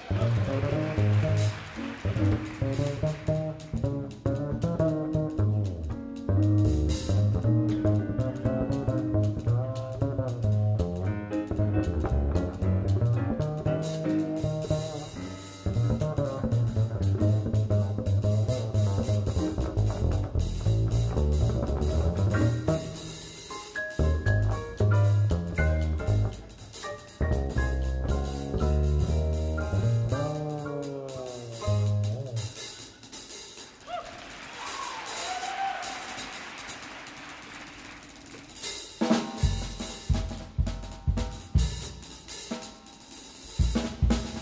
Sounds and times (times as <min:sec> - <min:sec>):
Orchestra: 0:00.0 - 0:44.4.